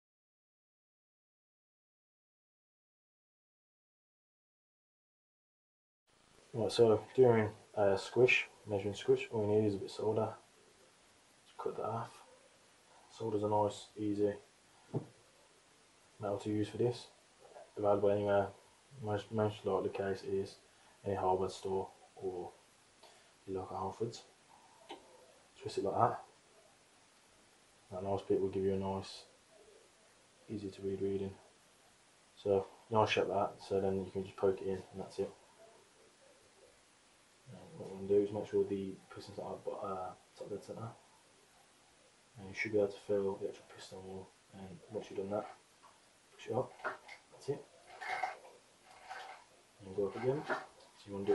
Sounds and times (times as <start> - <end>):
Speech: 6.5 - 10.4, 11.5 - 12.2, 13.1 - 14.5, 16.2 - 22.6, 23.5 - 24.3, 25.6 - 26.3, 27.9 - 29.3, 30.5 - 31.4, 32.4 - 35.4, 37.5 - 41.0, 42.4 - 45.6, 46.4 - 47.7, 49.8 - 51.3.